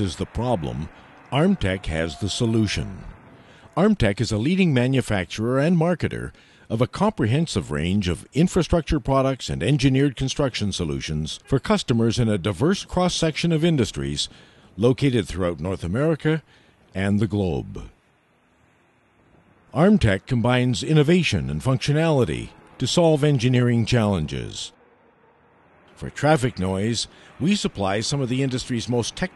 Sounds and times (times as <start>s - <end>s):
Speech: 0.0s - 3.2s, 3.8s - 18.0s, 19.7s - 24.8s, 26.0s - 29.3s.